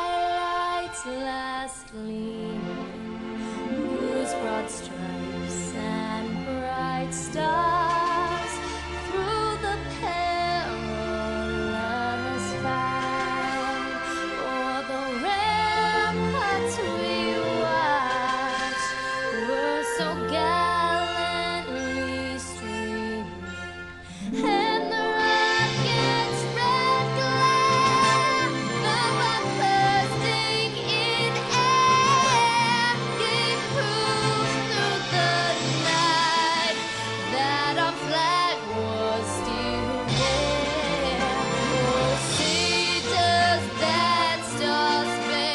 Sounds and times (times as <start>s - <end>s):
Female singing: 0.0s - 2.7s, 4.0s - 23.4s, 24.2s - 45.5s
Music: 0.0s - 45.5s.